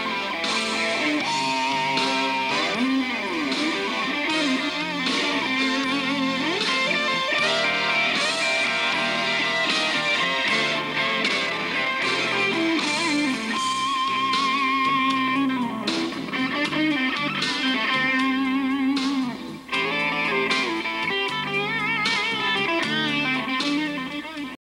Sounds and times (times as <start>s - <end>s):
Electric guitar: 0.0s - 24.6s.